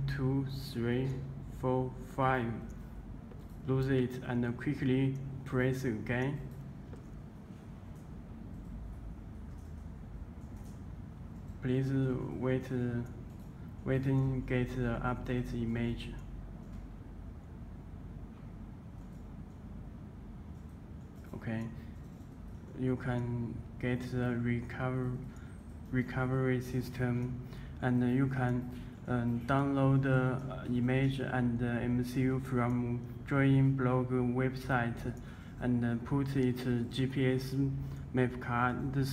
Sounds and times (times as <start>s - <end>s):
Speech: 0.0s - 2.8s, 3.6s - 6.5s, 11.6s - 13.2s, 13.8s - 16.3s, 21.3s - 21.9s, 22.7s - 25.3s, 25.9s - 39.1s.